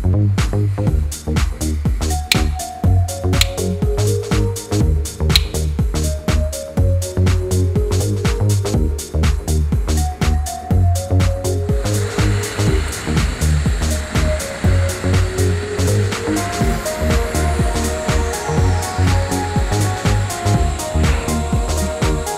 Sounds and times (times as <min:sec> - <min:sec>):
Music: 0:00.0 - 0:22.3.